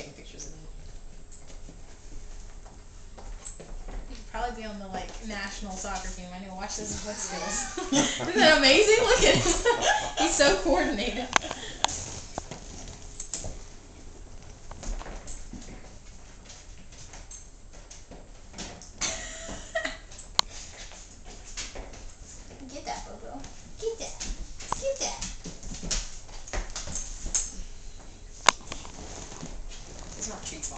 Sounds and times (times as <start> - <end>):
Speech: 0.0 - 0.8, 4.1 - 11.4, 30.2 - 30.7.